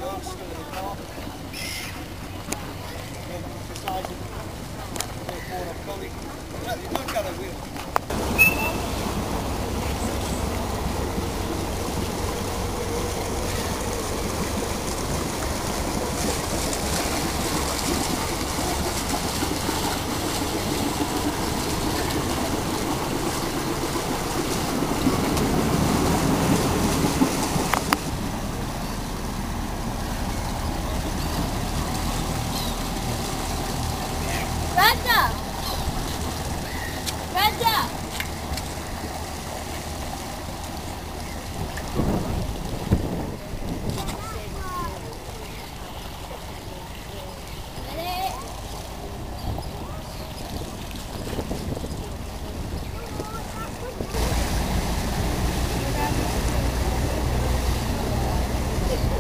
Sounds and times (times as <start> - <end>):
Sailboat, sailing ship: 0.0 - 59.2.